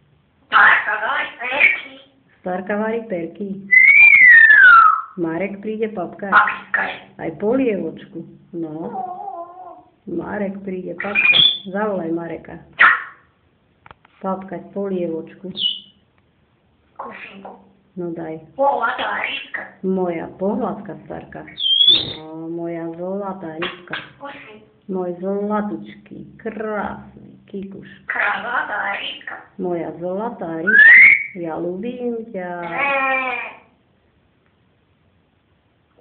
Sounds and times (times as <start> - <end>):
Speech: 0.5 - 3.8, 5.2 - 9.1, 10.1 - 12.8, 14.2 - 15.9, 17.0 - 30.8, 31.4 - 33.7
Bird: 0.6 - 2.1, 3.7 - 5.2, 11.0 - 11.8, 12.8 - 13.3, 15.5 - 16.0, 21.5 - 22.3, 23.6 - 24.6, 30.6 - 31.4
Domestic animals, pets: 8.8 - 10.0, 11.0 - 11.6, 12.8 - 13.3, 17.0 - 17.7, 21.6 - 22.2.